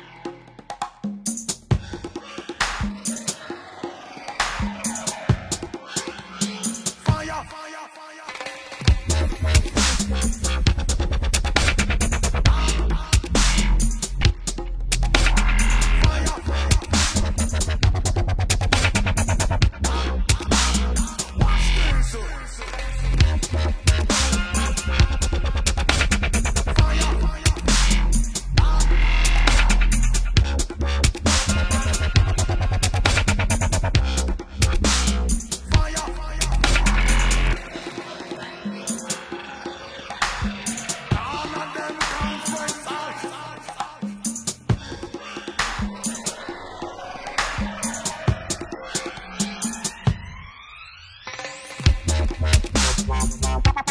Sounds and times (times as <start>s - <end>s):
Dubstep: 0.0s - 7.8s, 8.8s - 44.7s, 45.4s - 53.9s.